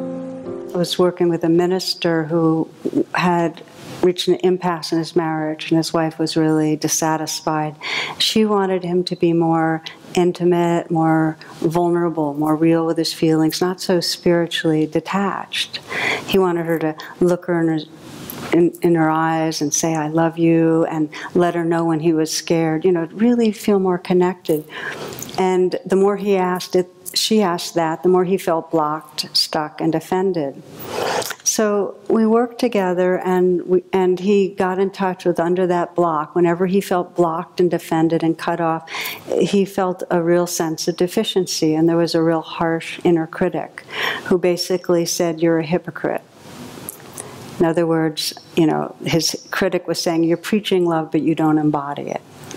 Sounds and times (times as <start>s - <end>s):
Speech: 0.8s - 17.9s, 18.5s - 24.7s, 25.3s - 30.6s, 31.4s - 46.2s, 47.6s - 52.2s.